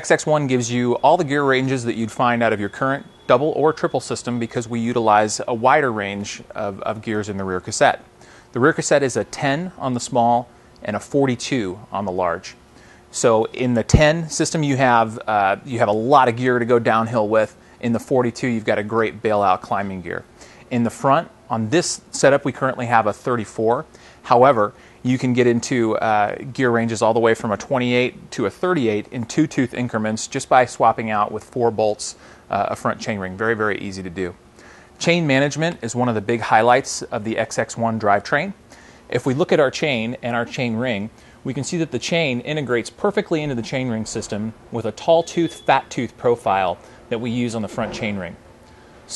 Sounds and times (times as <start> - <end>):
Speech: 0.0 - 34.4, 35.0 - 48.4.